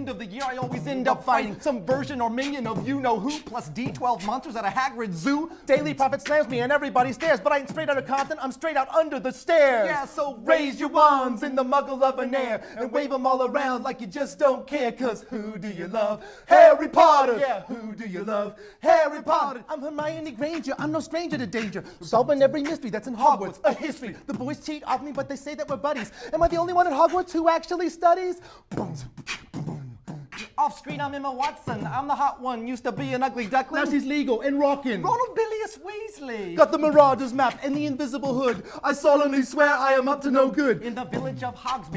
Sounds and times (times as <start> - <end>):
Rapping: 0.0 - 41.9.